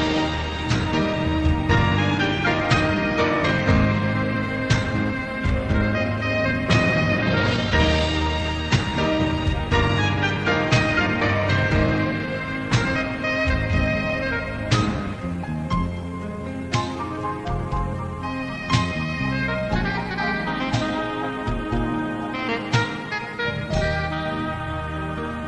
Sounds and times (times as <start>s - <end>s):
Music: 0.0s - 25.4s.